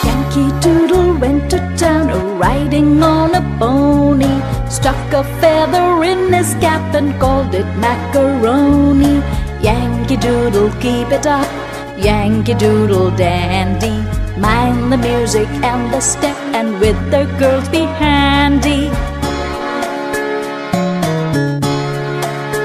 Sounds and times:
Music for children: 0:00.0 - 0:22.6.

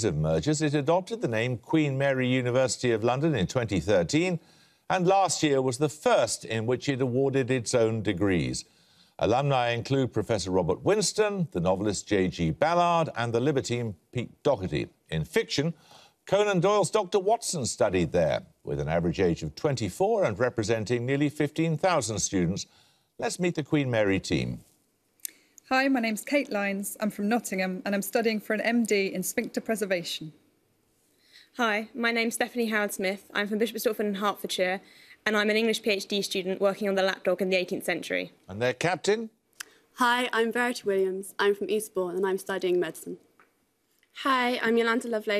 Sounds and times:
Speech: 0:00.0 - 0:08.6, 0:09.2 - 0:24.6, 0:31.6 - 0:39.3.

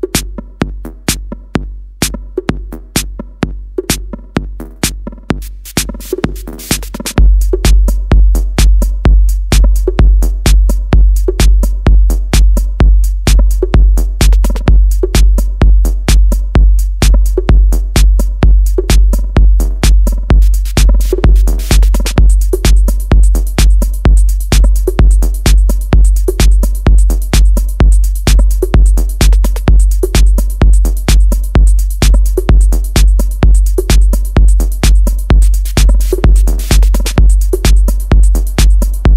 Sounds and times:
Techno: 0:00.0 - 0:39.1.

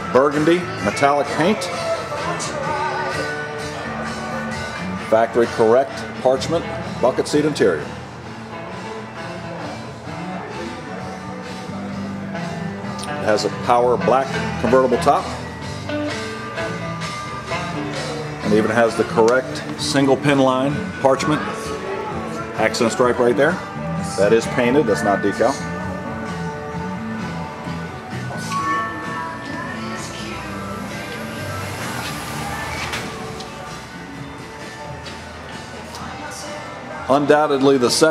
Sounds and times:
Rock and roll: 0:00.0 - 0:38.1.

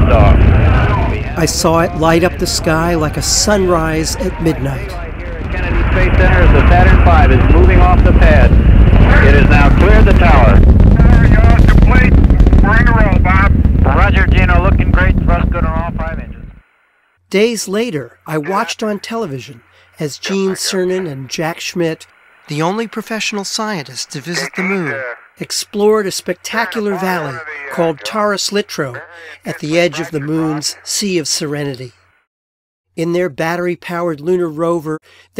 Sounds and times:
Speech: 0:00.0 - 0:16.4, 0:17.3 - 0:32.0, 0:33.0 - 0:35.3.

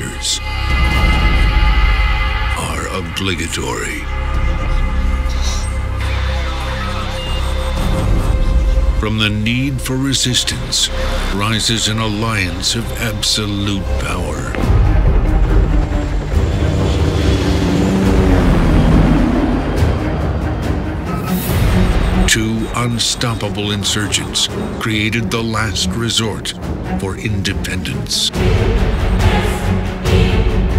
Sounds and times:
Speech: 0:00.0 - 0:00.4, 0:02.6 - 0:04.1, 0:09.0 - 0:14.6, 0:22.3 - 0:28.3
Music: 0:00.0 - 0:30.7.

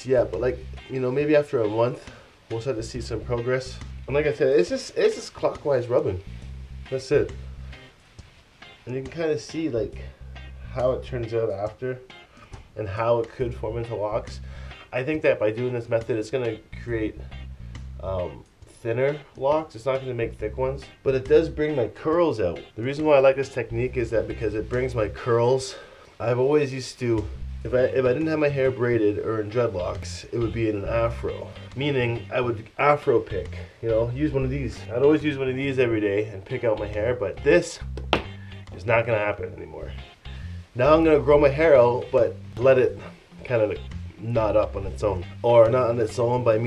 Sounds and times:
Speech: 0:00.0 - 0:06.2, 0:06.9 - 0:07.4, 0:08.9 - 0:10.1, 0:10.7 - 0:12.1, 0:12.8 - 0:17.2, 0:18.0 - 0:37.9, 0:38.7 - 0:40.0, 0:40.8 - 0:46.6
Inside, small room: 0:00.0 - 0:46.6
Music: 0:00.0 - 0:46.6.

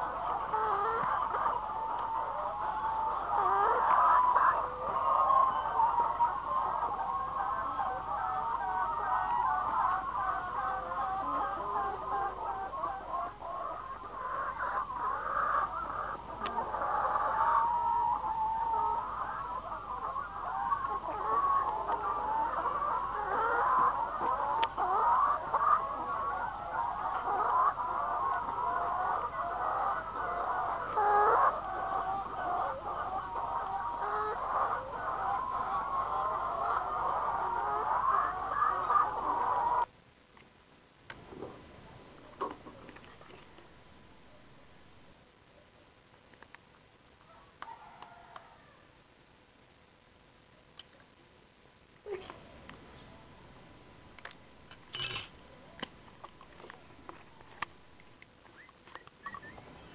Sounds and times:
Cluck: 0:00.0 - 0:39.9.

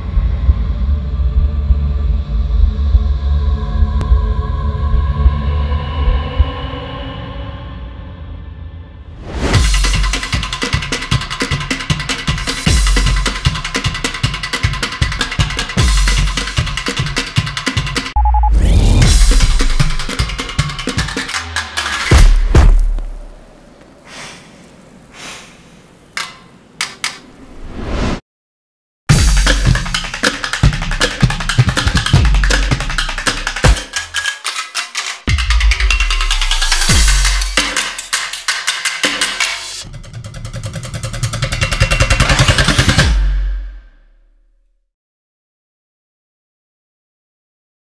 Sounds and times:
Percussion: 0:09.2 - 0:23.5, 0:29.1 - 0:44.4.

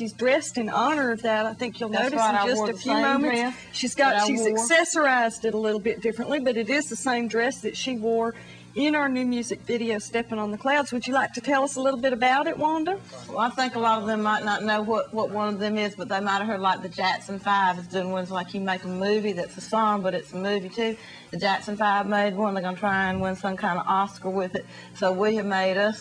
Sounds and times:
Speech: 0:00.3 - 0:20.8.

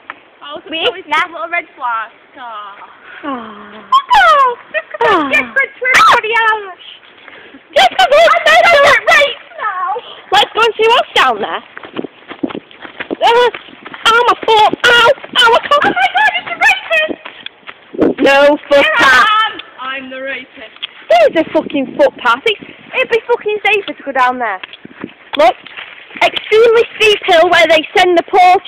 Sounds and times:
Walk, footsteps: 0:11.2 - 0:19.2, 0:24.6 - 0:27.9.

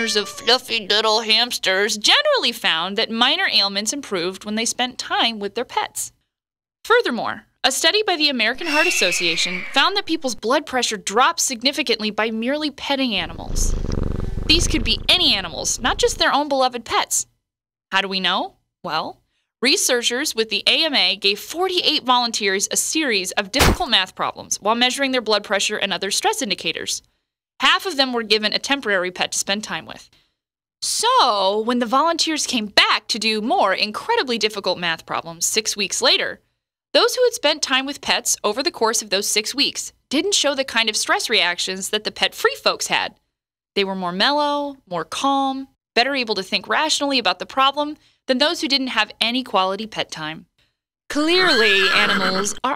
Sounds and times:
Speech: 0:00.0 - 0:06.2, 0:06.9 - 0:13.7, 0:14.5 - 0:17.3, 0:17.9 - 0:27.0, 0:27.6 - 0:30.2, 0:30.8 - 0:36.4, 0:37.0 - 0:43.2, 0:43.8 - 0:50.5, 0:51.1 - 0:52.7
Purr: 0:13.2 - 0:16.3.

